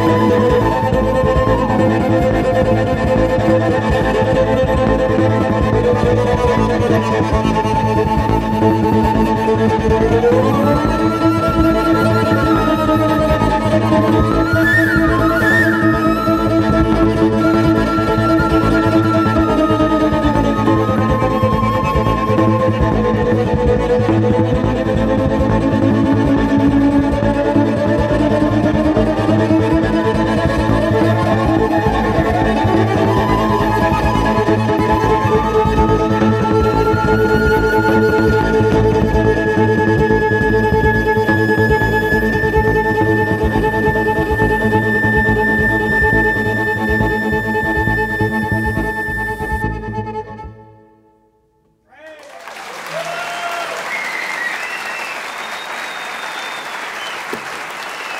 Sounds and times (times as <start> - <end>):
Double bass: 0.0 - 50.7
Cello: 0.0 - 51.0
Speech: 51.9 - 53.7.